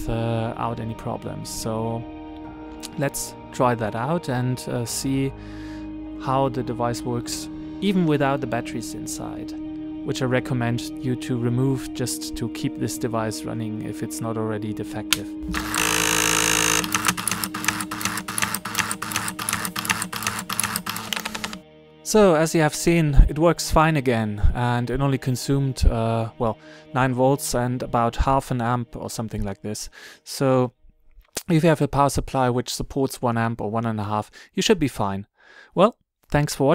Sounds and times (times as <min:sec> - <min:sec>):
Speech: 0:00.0 - 0:02.0, 0:02.9 - 0:05.3, 0:06.2 - 0:15.4, 0:22.1 - 0:30.7, 0:31.4 - 0:36.7
Music: 0:00.0 - 0:32.5
Printer: 0:15.5 - 0:21.6.